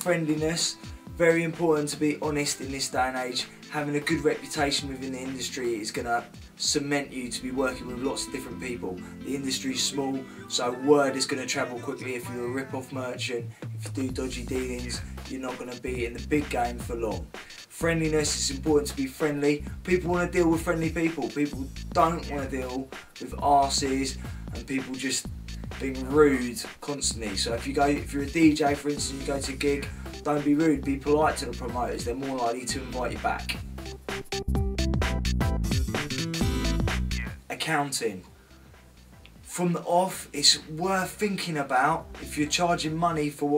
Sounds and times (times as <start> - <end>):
Speech: 0.0 - 33.6, 37.2 - 38.3, 39.5 - 43.5
Music: 0.0 - 43.5.